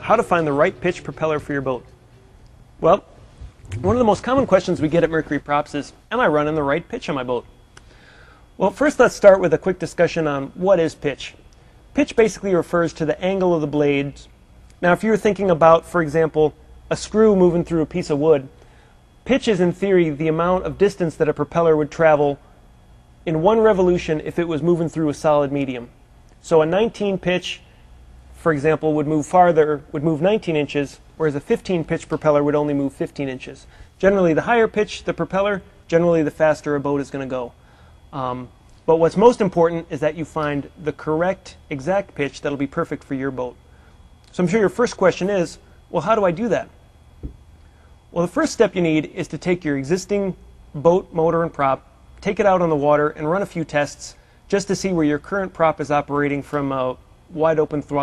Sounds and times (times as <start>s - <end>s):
Speech: 0.0s - 1.9s, 2.8s - 3.1s, 3.7s - 7.5s, 8.6s - 11.4s, 12.0s - 18.5s, 19.2s - 22.4s, 23.2s - 27.7s, 28.4s - 37.6s, 38.2s - 43.6s, 44.3s - 46.8s, 48.2s - 58.0s.